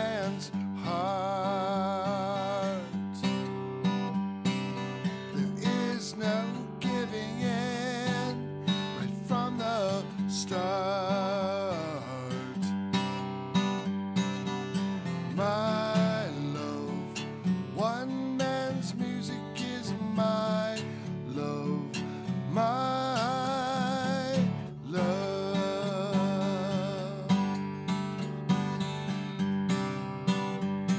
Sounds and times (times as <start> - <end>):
Music: 0.0 - 30.9.